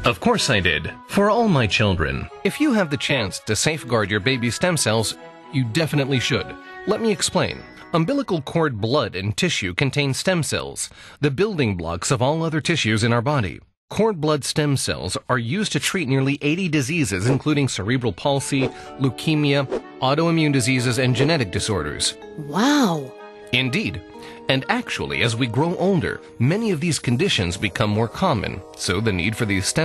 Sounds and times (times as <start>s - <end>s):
Music: 0.0s - 10.1s, 14.9s - 29.8s
Speech: 0.0s - 29.8s.